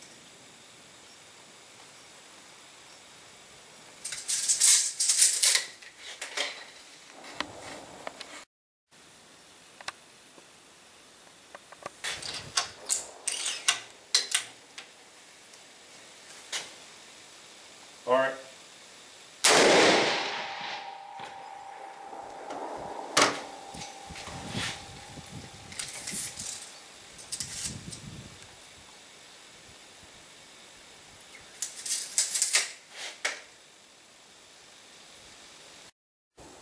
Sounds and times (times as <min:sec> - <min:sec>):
Speech: 0:18.0 - 0:18.6.